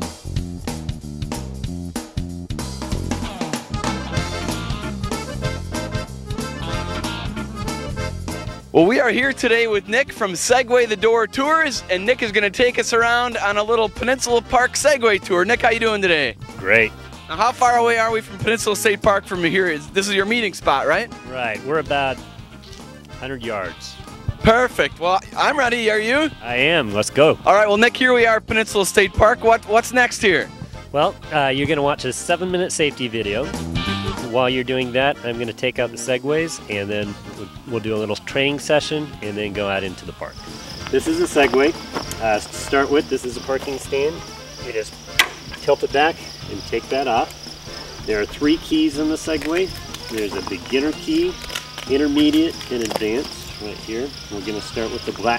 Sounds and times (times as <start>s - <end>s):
Music: 0.0s - 55.3s
Speech: 8.8s - 22.2s, 23.2s - 33.5s, 34.2s - 45.0s, 45.6s - 47.3s, 48.0s - 55.3s.